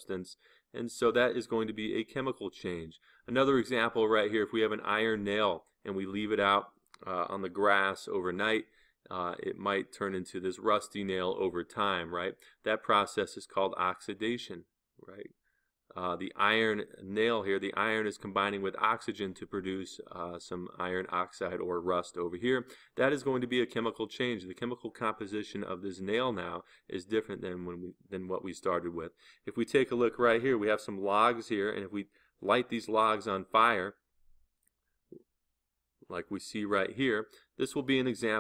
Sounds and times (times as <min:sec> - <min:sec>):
Speech: 0:00.0 - 0:15.3, 0:16.0 - 0:34.0, 0:36.1 - 0:38.4.